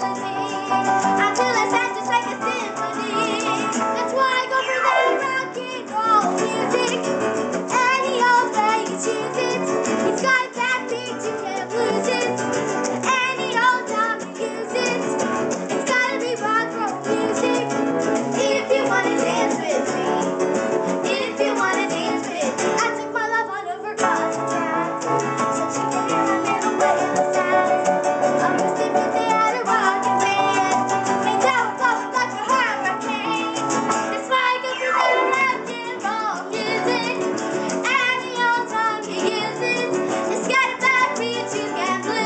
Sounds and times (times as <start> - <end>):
Rock and roll: 0.0 - 23.3, 23.9 - 42.2.